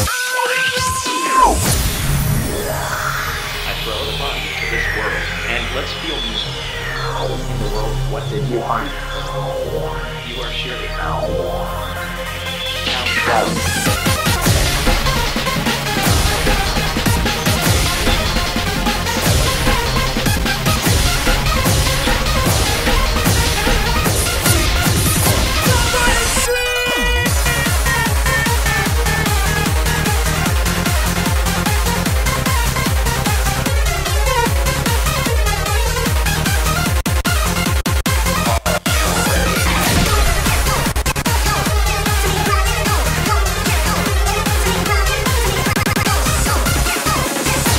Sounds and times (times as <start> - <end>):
Music: 0.0 - 47.7.